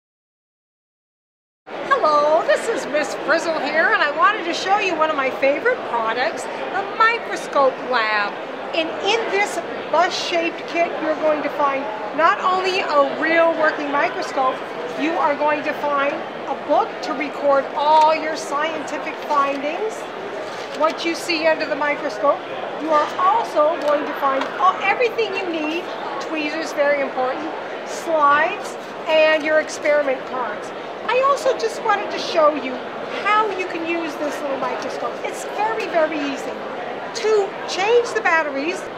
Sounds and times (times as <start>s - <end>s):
Speech: 1.9s - 20.1s, 20.8s - 38.9s.